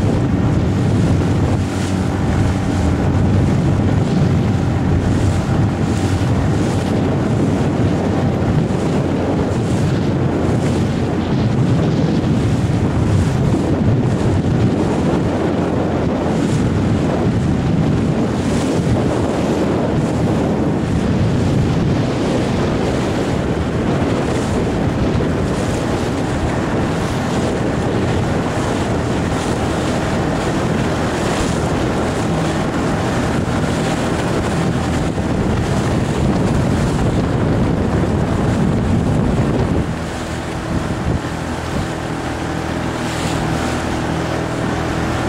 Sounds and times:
Water: 0.0s - 45.2s.

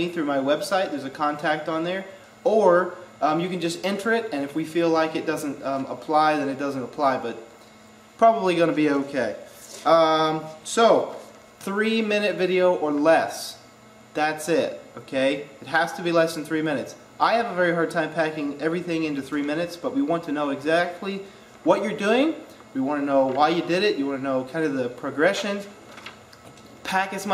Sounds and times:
Speech: 0.0s - 7.4s, 8.2s - 25.8s, 26.8s - 27.3s.

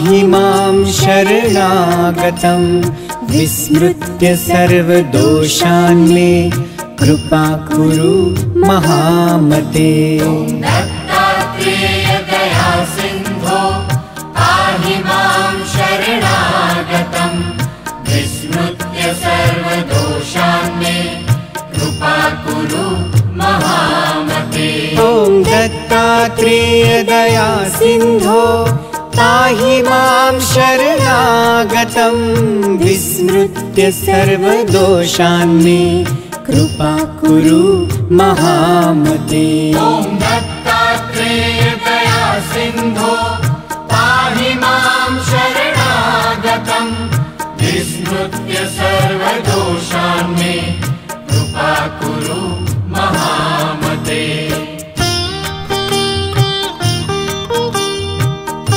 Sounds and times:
Mantra: 0.0s - 17.5s, 18.1s - 54.8s.

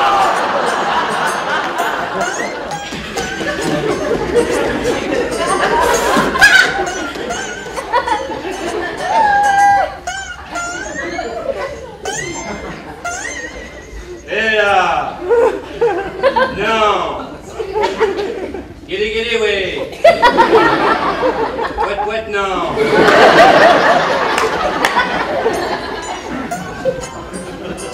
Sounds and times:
Inside, public space: 0.0s - 27.9s.

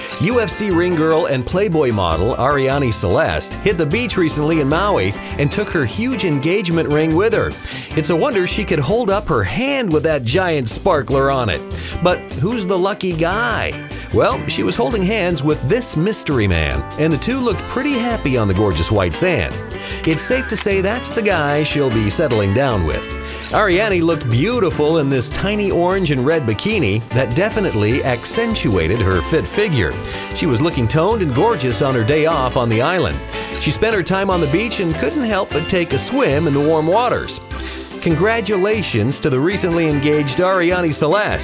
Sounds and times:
Music: 0.0s - 41.4s
Speech: 0.2s - 37.4s, 38.0s - 41.4s.

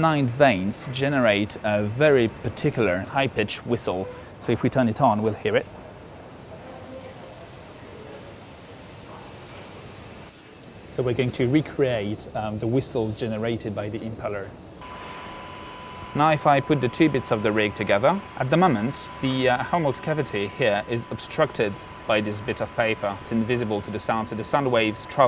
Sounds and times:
Speech: 11.0s - 14.5s, 16.2s - 25.2s.

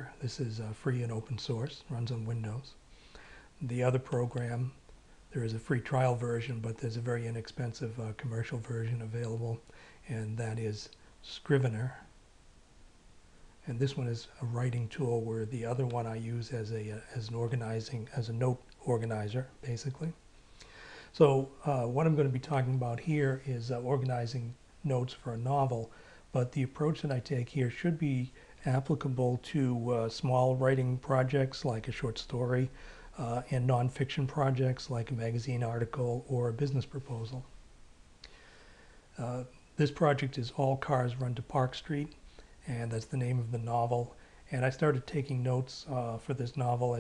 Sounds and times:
Speech: 0.0s - 2.8s, 3.6s - 12.2s, 13.6s - 20.2s, 21.1s - 37.6s, 39.2s - 47.0s.

